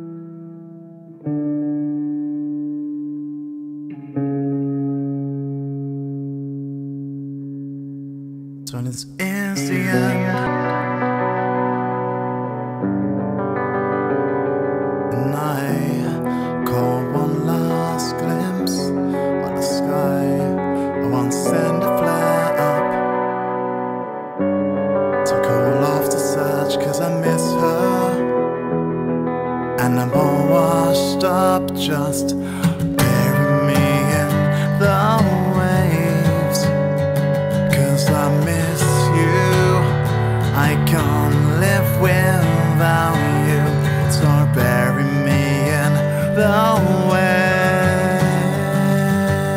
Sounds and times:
Music: 0:00.0 - 0:49.5.

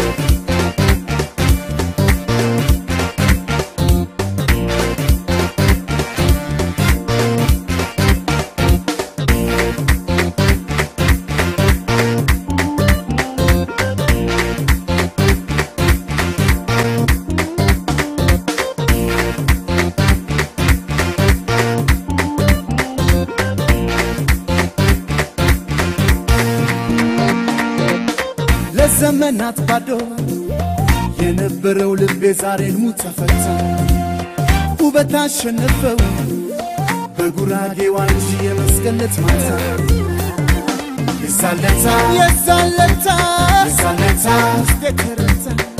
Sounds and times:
Rhythm and blues: 0:00.0 - 0:45.7.

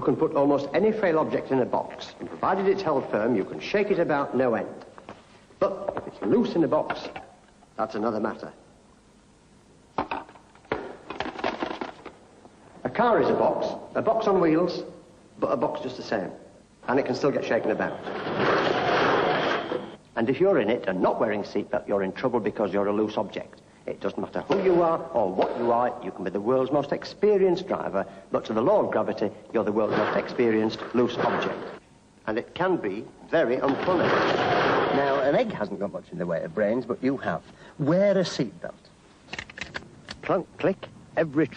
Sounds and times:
Speech: 0:00.0 - 0:04.9, 0:05.6 - 0:08.6, 0:12.8 - 0:18.0, 0:20.2 - 0:34.2, 0:34.9 - 0:38.9, 0:40.2 - 0:41.5.

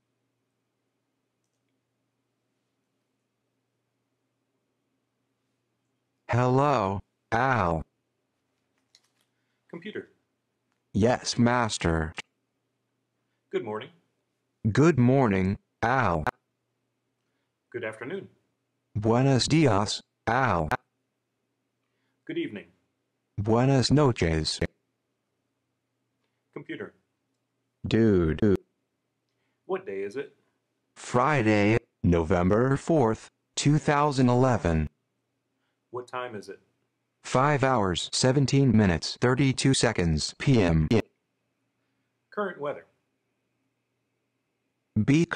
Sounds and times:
Male speech, man speaking: 0:06.3 - 0:07.9, 0:09.8 - 0:10.2, 0:11.0 - 0:12.2, 0:13.5 - 0:14.0, 0:14.7 - 0:16.3, 0:17.7 - 0:18.4, 0:19.0 - 0:20.8, 0:22.3 - 0:22.8, 0:23.4 - 0:24.7, 0:26.6 - 0:27.0, 0:27.9 - 0:28.6, 0:29.7 - 0:30.4, 0:31.0 - 0:34.9, 0:36.0 - 0:36.7, 0:37.3 - 0:41.1, 0:42.3 - 0:42.9, 0:45.0 - 0:45.3.

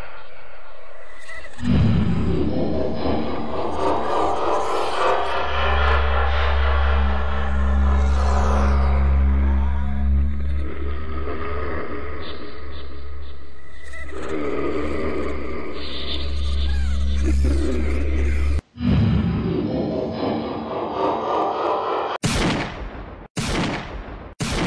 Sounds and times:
Music: 0:01.4 - 0:22.2.

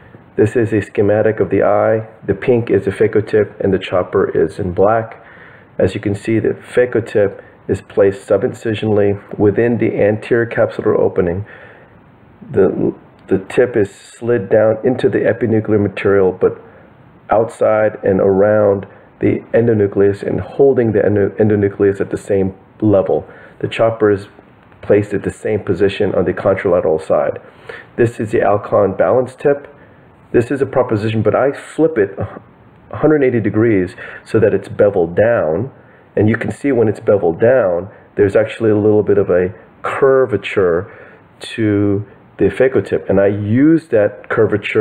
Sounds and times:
Speech: 0:00.4 - 0:11.5, 0:12.4 - 0:16.7, 0:17.3 - 0:27.4, 0:28.0 - 0:44.8.

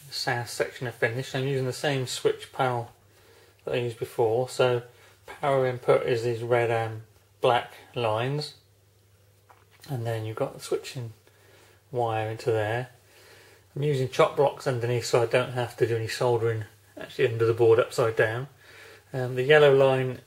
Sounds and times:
Speech: 0:00.0 - 0:03.0, 0:03.6 - 0:08.7, 0:09.8 - 0:11.2, 0:11.9 - 0:13.0, 0:13.8 - 0:20.2
Inside, small room: 0:00.0 - 0:20.2.

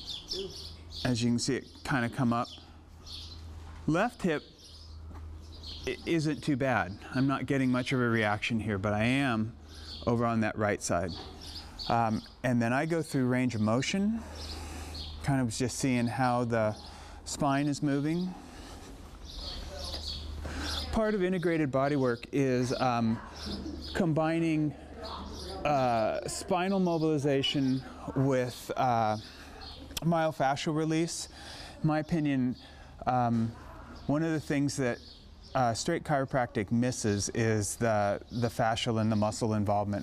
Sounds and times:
Speech: 0:00.4 - 0:02.6, 0:03.9 - 0:04.5, 0:05.9 - 0:11.2, 0:11.9 - 0:14.3, 0:15.2 - 0:18.4, 0:19.4 - 0:20.1, 0:20.7 - 0:40.0.

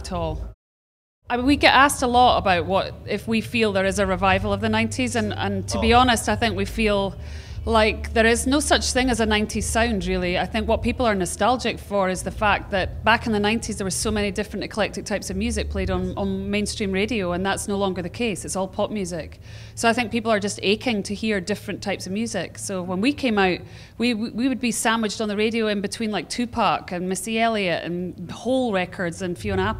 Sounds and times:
Speech: 0:00.0 - 0:00.5, 0:01.3 - 0:07.1, 0:07.7 - 0:29.7.

